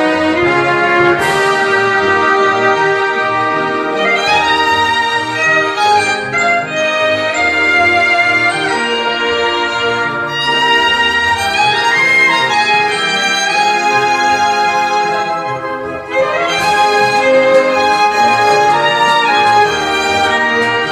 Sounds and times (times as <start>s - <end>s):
Violin, fiddle: 0.0s - 20.9s.